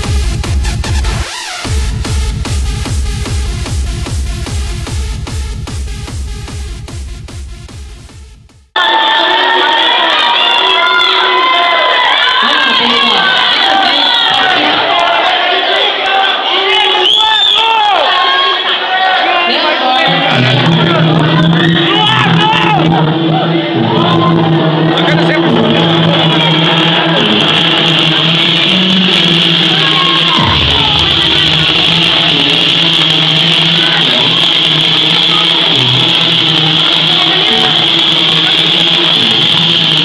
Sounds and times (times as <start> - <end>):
Music: 0.0 - 8.9, 20.0 - 40.0
Speech: 9.2 - 22.8, 24.9 - 26.0.